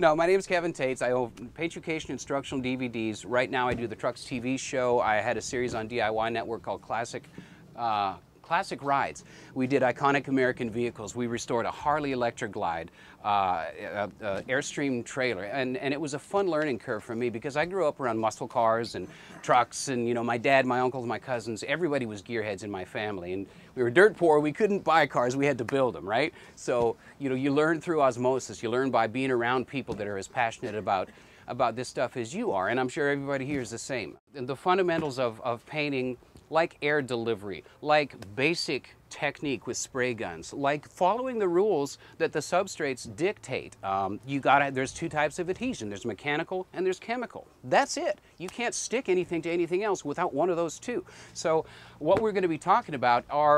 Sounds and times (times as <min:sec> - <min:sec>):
Speech: 0:00.0 - 0:53.5.